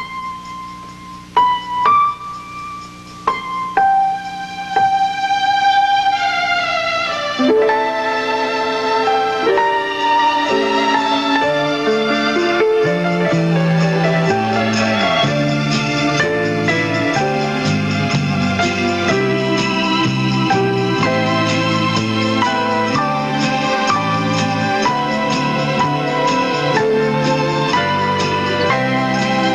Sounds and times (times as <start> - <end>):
Jingle bell: 10.2 - 29.5.